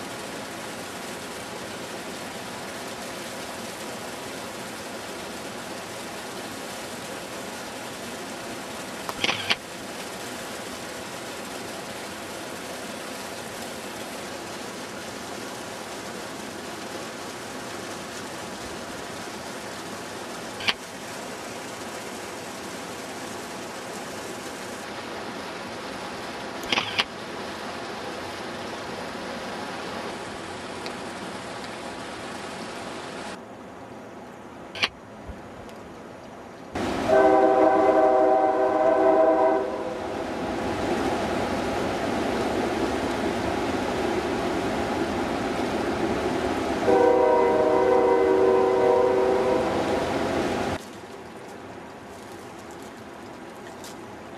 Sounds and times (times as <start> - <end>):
Stream: 0.0 - 54.3
Waterfall: 0.0 - 54.3.